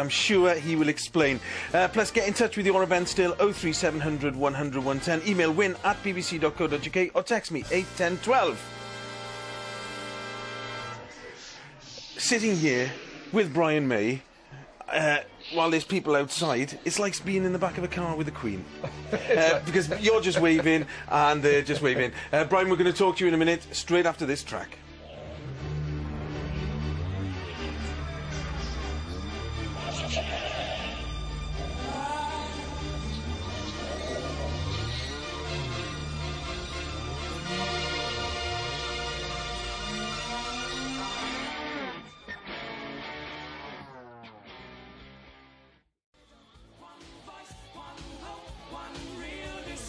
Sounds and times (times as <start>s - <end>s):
Speech: 0.0s - 8.6s, 11.2s - 14.2s, 14.8s - 18.6s, 19.3s - 24.8s
Music: 0.0s - 14.6s, 15.9s - 49.8s.